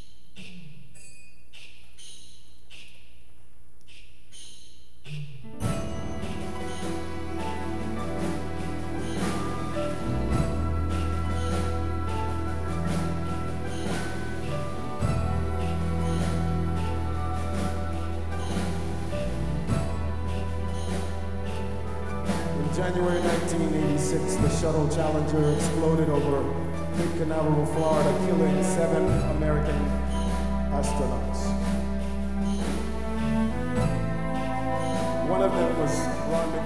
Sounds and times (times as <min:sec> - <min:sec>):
Music: 0:05.3 - 0:36.6.